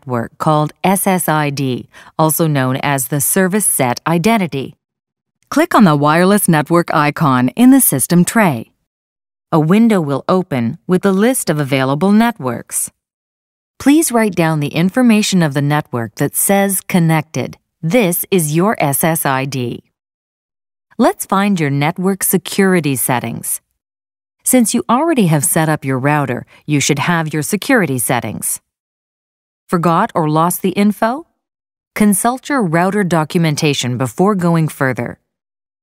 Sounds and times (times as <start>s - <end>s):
Speech: 0.0s - 4.8s, 5.5s - 8.8s, 9.5s - 13.0s, 13.8s - 19.9s, 21.0s - 23.6s, 24.4s - 28.6s, 29.7s - 31.3s, 32.0s - 35.2s.